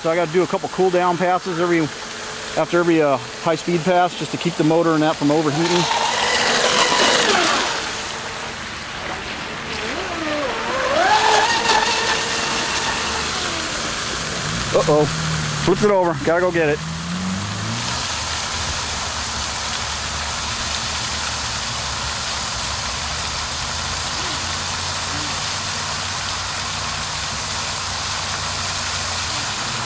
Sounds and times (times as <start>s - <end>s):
Speech: 0.0s - 1.9s, 2.6s - 5.9s, 14.8s - 16.8s
Boat, Water vehicle: 0.0s - 29.8s
Outside, urban or manmade: 0.0s - 29.8s.